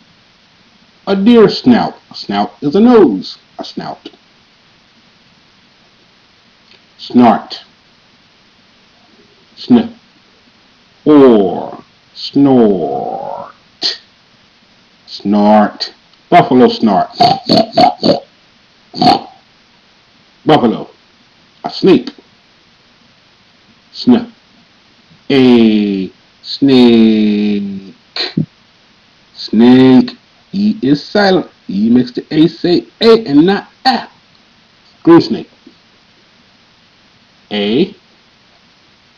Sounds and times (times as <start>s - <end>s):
Growling: 11.3s - 11.9s, 12.6s - 13.6s.